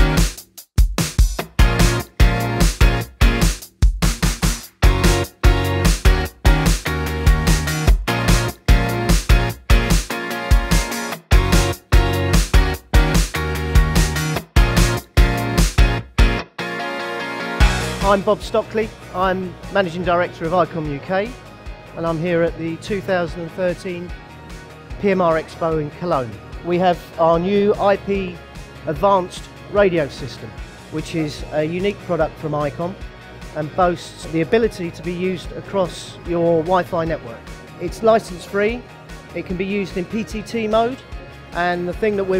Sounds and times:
Music: 0:00.0 - 0:42.3
Speech: 0:18.0 - 0:21.4, 0:22.0 - 0:24.1, 0:25.0 - 0:33.0, 0:33.6 - 0:38.8, 0:39.4 - 0:41.0, 0:41.6 - 0:42.3.

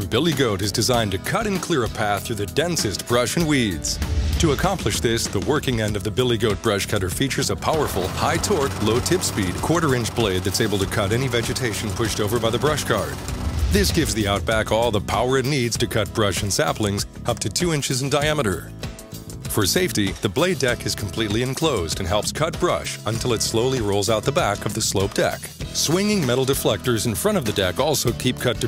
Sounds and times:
Speech: 0:00.0 - 0:18.7, 0:19.5 - 0:28.6
Music: 0:00.0 - 0:28.6.

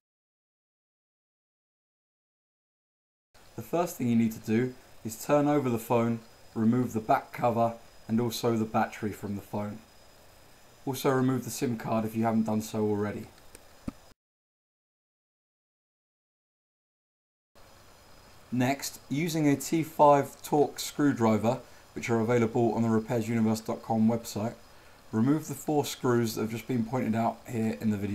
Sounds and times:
Speech: 0:03.6 - 0:09.9, 0:10.9 - 0:13.3, 0:18.5 - 0:28.1.

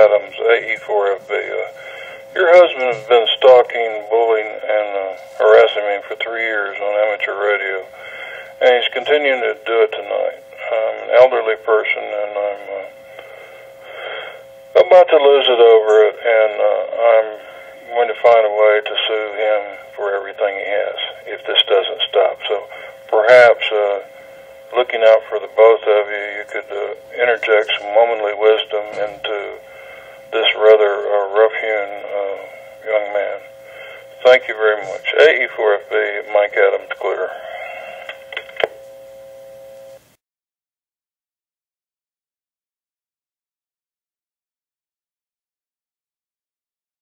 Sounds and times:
Speech: 0:00.0 - 0:01.8, 0:02.4 - 0:08.0, 0:08.6 - 0:13.0, 0:14.8 - 0:24.1, 0:24.7 - 0:29.7, 0:30.3 - 0:33.5, 0:34.2 - 0:37.8
Telephone: 0:22.2 - 0:40.0.

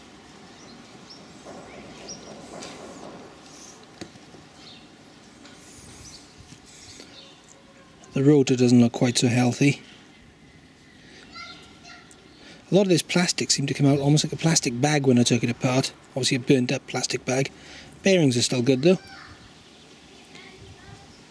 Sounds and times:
Speech: 0:08.0 - 0:09.8, 0:12.7 - 0:19.4, 0:20.2 - 0:21.3.

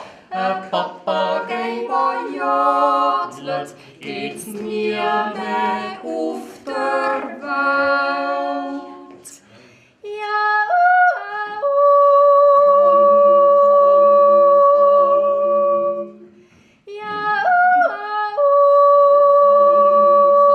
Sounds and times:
Yodeling: 0:10.1 - 0:16.3, 0:16.9 - 0:20.5.

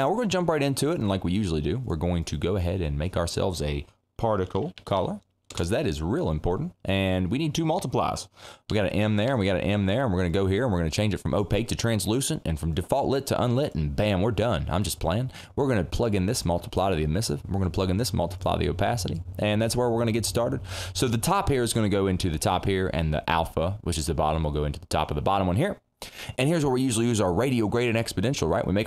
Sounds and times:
Speech: 0:00.0 - 0:25.8, 0:26.4 - 0:28.8.

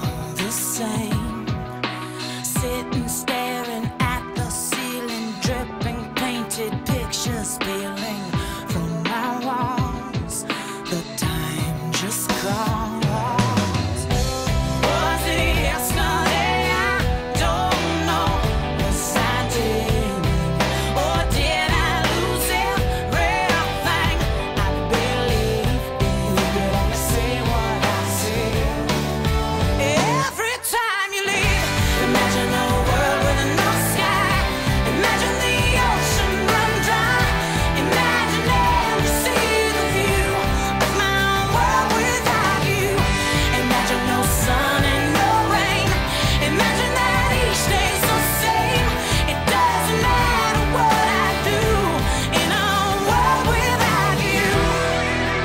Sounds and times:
Independent music: 0:00.0 - 0:55.4
Ska: 0:00.0 - 0:55.4.

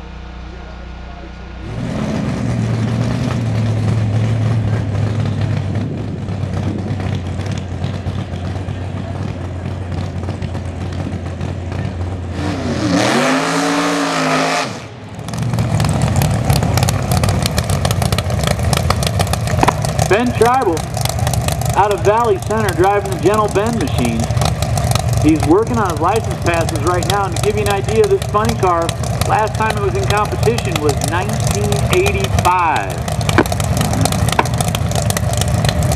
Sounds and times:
Speech: 0:00.0 - 0:01.6, 0:20.1 - 0:20.9, 0:21.8 - 0:24.3, 0:25.2 - 0:33.0
Car: 0:00.0 - 0:35.9.

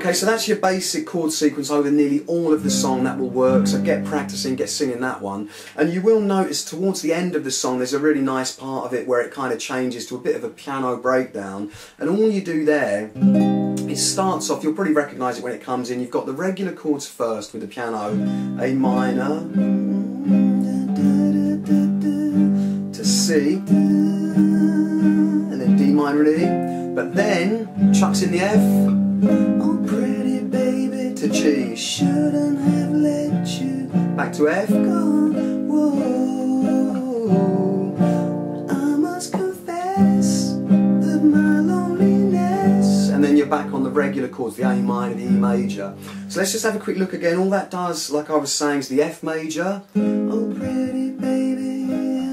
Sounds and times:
Speech: 0:00.0 - 0:13.2, 0:13.8 - 0:20.0, 0:23.0 - 0:24.0, 0:25.5 - 0:28.9, 0:29.6 - 0:37.7, 0:38.7 - 0:40.6, 0:41.2 - 0:51.0
Strum: 0:18.0 - 0:46.8
Singing: 0:18.6 - 0:25.8.

